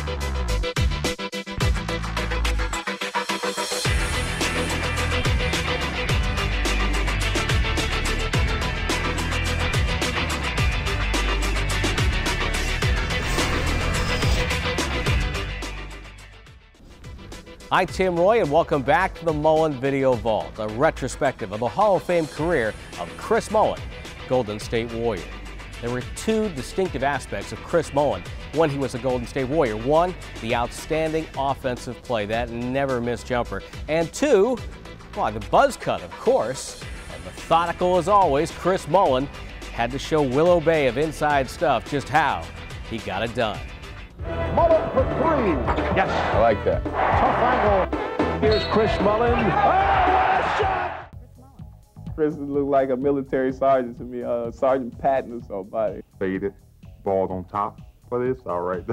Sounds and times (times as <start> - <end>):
Music: 0.0 - 58.9
Speech: 17.7 - 34.6, 35.2 - 43.6, 44.6 - 49.6, 52.2 - 58.9.